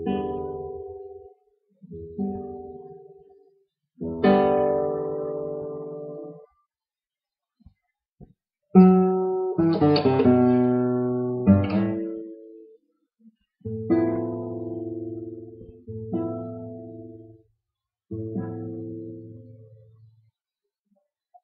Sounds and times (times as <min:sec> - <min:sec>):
Acoustic guitar: 0:00.0 - 0:06.6, 0:07.6 - 0:12.8, 0:13.6 - 0:17.5, 0:18.1 - 0:20.3.